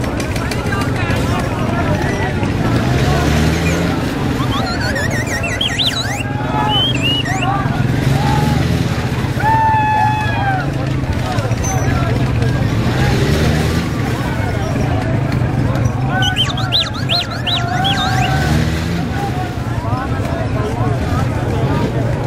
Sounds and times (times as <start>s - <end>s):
Speech: 0.0s - 22.2s
Vehicle: 0.0s - 22.2s.